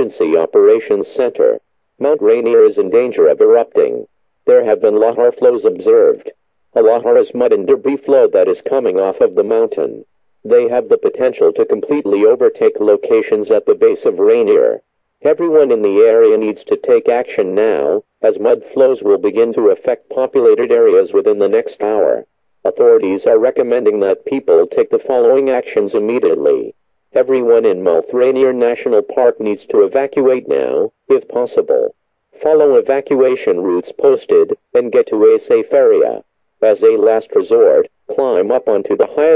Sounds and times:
Speech: 0.0 - 39.3.

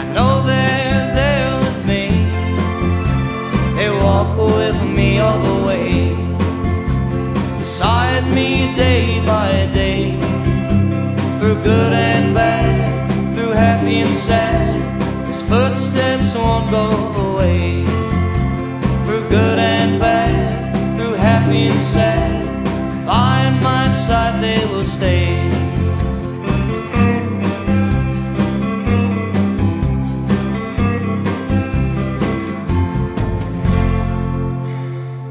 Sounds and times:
Blues: 0.0 - 35.3
Country: 0.0 - 35.3
Steel guitar, slide guitar: 0.0 - 35.3
Singing: 3.4 - 6.2, 11.4 - 17.7, 19.1 - 25.3.

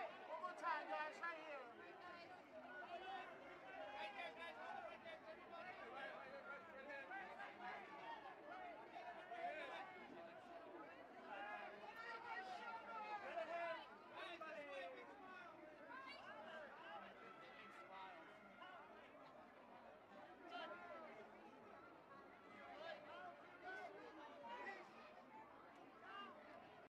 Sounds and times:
Speech: 0.0 - 26.9.

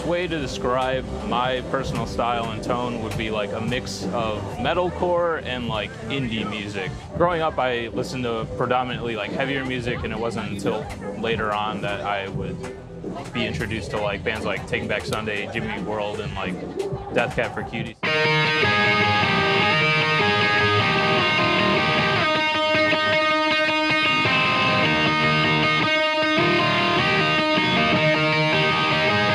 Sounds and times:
Speech: 0.0 - 18.0
Music: 0.0 - 29.3.

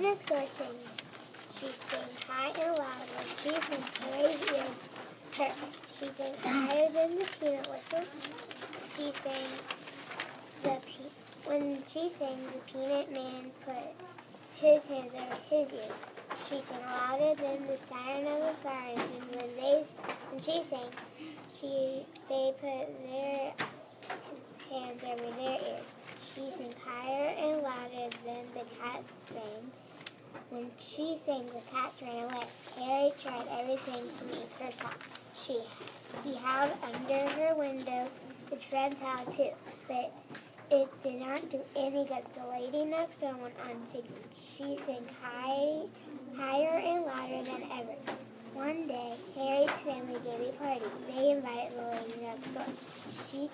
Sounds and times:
Speech: 0.0 - 9.7, 10.6 - 23.6, 24.6 - 29.8, 30.5 - 53.5.

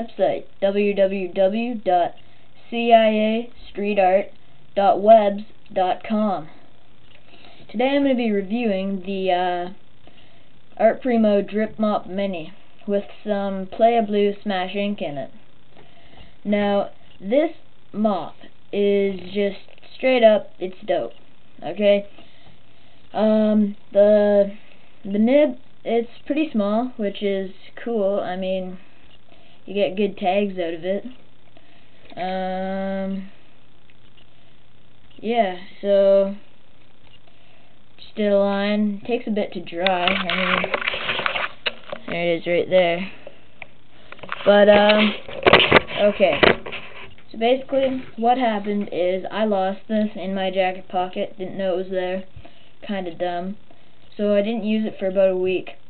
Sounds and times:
Speech: 0.0 - 6.6, 7.6 - 9.8, 10.8 - 15.4, 16.4 - 22.2, 23.1 - 28.9, 29.7 - 31.2, 32.1 - 33.4, 35.2 - 36.5, 38.0 - 40.9, 41.9 - 43.3, 44.3 - 45.3, 45.9 - 46.6, 47.3 - 55.9.

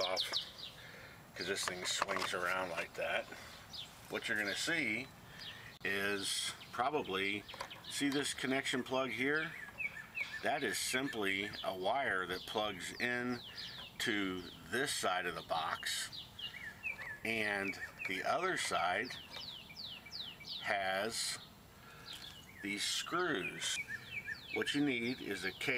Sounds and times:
Speech: 0.0 - 0.4, 1.4 - 3.4, 4.1 - 5.1, 5.8 - 9.6, 10.4 - 16.1, 17.3 - 19.2, 20.6 - 21.4, 22.6 - 23.8, 24.6 - 25.7.

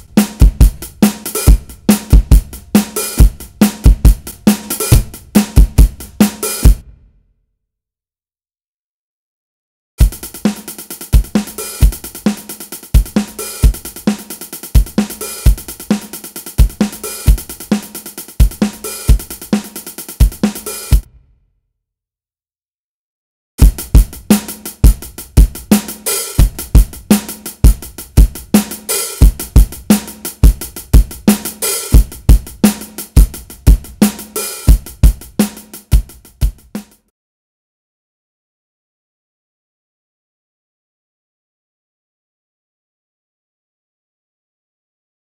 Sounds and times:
Drum kit: 0.0 - 7.1, 10.0 - 21.2, 23.6 - 37.1
Bass drum: 0.0 - 7.2, 10.0 - 10.6, 11.2 - 19.6, 20.2 - 21.3, 23.6 - 37.1.

